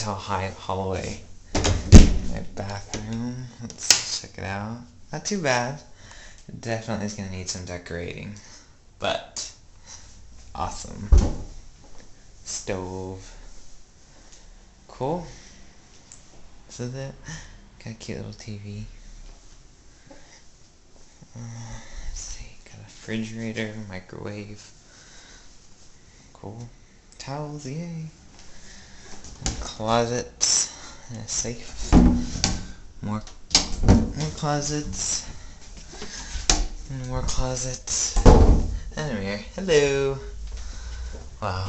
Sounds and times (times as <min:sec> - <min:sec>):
Speech: 0:00.0 - 0:01.3, 0:02.2 - 0:05.9, 0:06.5 - 0:09.6, 0:10.5 - 0:11.3, 0:12.5 - 0:13.4, 0:14.9 - 0:15.4, 0:16.7 - 0:19.0, 0:21.3 - 0:24.7, 0:26.4 - 0:28.2, 0:29.5 - 0:31.8, 0:33.0 - 0:33.4, 0:34.2 - 0:35.4, 0:36.9 - 0:40.4, 0:41.4 - 0:41.6.